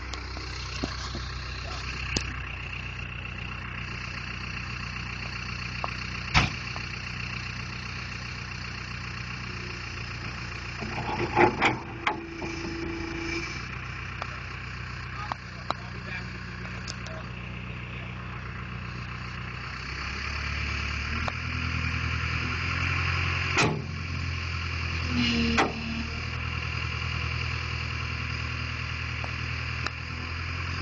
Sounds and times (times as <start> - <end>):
Speech: 15.1 - 18.2.